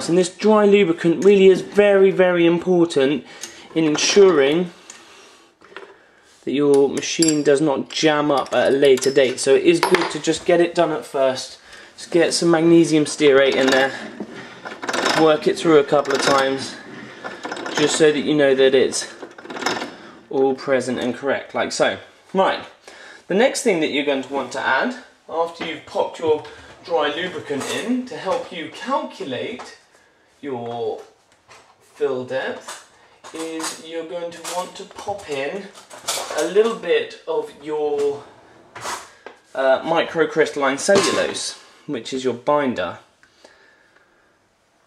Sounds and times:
Speech: 0.0s - 4.8s, 6.4s - 14.0s, 15.1s - 16.8s, 17.8s - 19.2s, 20.3s - 31.2s, 32.0s - 32.7s, 33.3s - 38.3s, 39.6s - 43.1s.

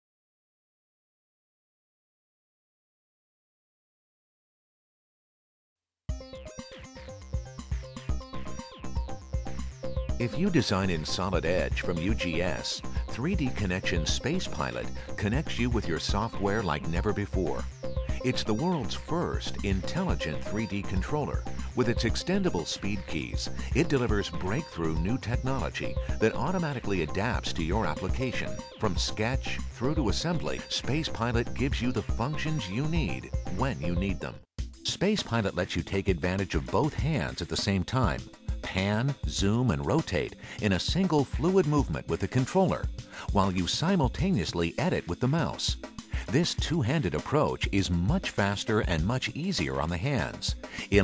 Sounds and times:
Music: 6.1s - 51.0s
Speech: 10.2s - 51.0s.

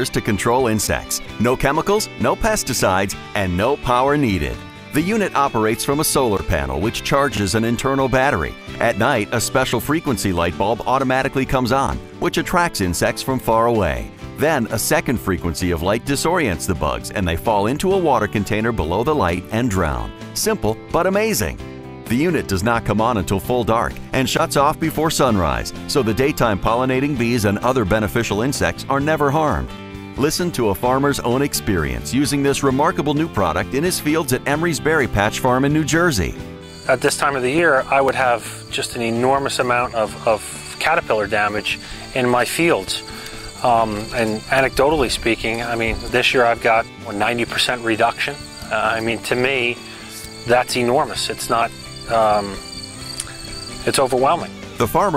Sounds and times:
Speech: 0.0s - 43.0s, 43.6s - 49.8s, 50.4s - 52.6s, 53.8s - 55.1s
Music: 0.0s - 55.1s.

